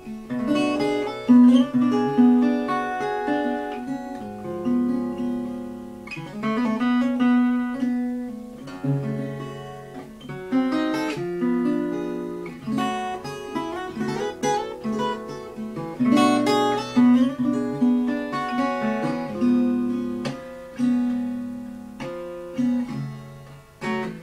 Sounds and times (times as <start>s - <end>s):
Acoustic guitar: 0.0s - 24.2s
Strum: 0.0s - 24.2s.